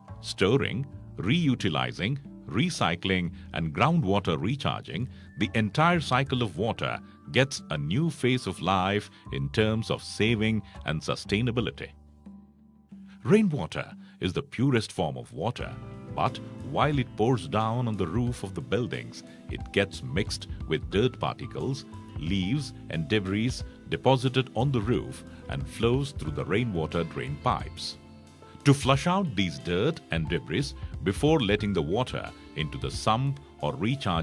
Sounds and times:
Music: 0:00.0 - 0:34.2
Speech: 0:00.2 - 0:11.9, 0:13.2 - 0:28.0, 0:28.6 - 0:34.2.

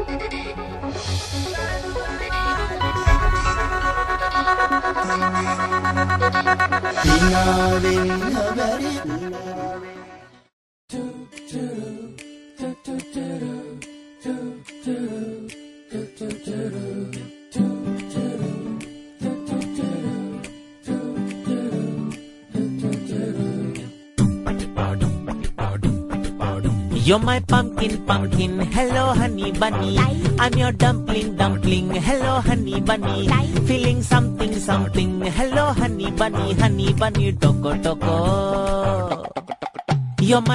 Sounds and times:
Pop music: 0:00.0 - 0:40.5.

